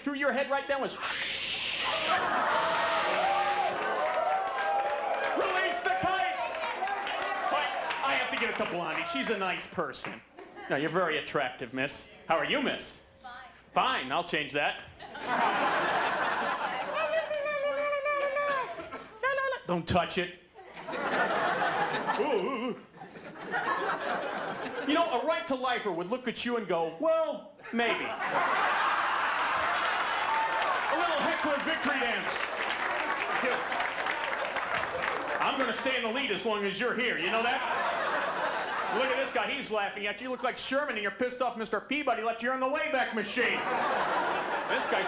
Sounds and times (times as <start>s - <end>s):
Laughter: 2.0s - 2.8s, 10.3s - 11.0s, 15.0s - 19.4s, 20.6s - 24.9s, 28.1s - 30.3s, 37.2s - 39.4s, 43.4s - 45.0s
Speech: 24.9s - 28.2s, 35.4s - 37.7s, 38.9s - 43.6s, 44.7s - 45.0s.